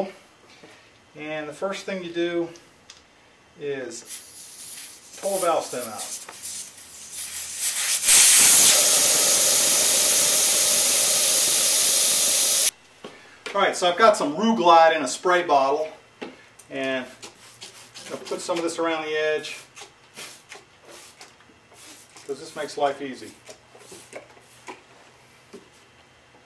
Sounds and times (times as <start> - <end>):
Speech: 1.2 - 2.6, 3.6 - 4.1, 5.2 - 6.1, 13.5 - 16.0, 16.7 - 17.2, 18.1 - 19.6, 22.3 - 23.4.